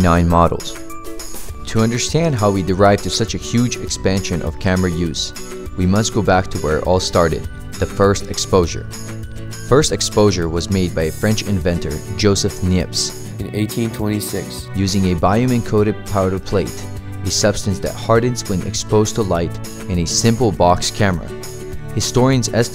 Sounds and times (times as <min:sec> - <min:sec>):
Speech: 0:00.0 - 0:00.8, 0:01.6 - 0:08.9, 0:09.7 - 0:21.4, 0:22.0 - 0:22.7
Music: 0:00.0 - 0:22.7.